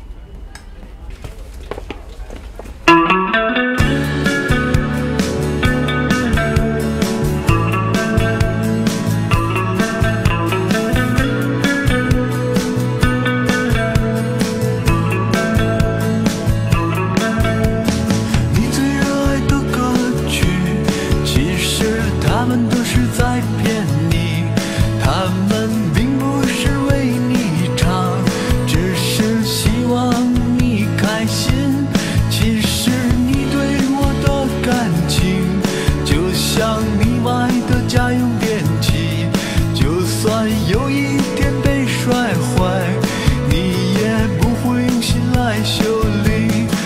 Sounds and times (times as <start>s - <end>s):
Music: 2.9s - 46.8s.